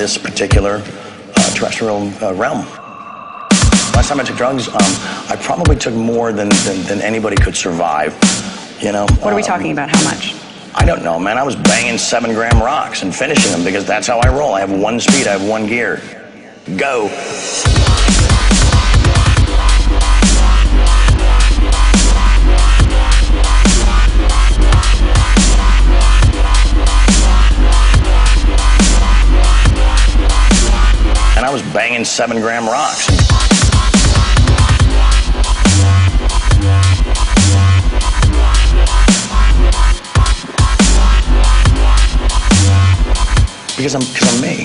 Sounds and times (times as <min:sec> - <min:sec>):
Dubstep: 0:01.4 - 0:14.5, 0:17.0 - 0:44.6.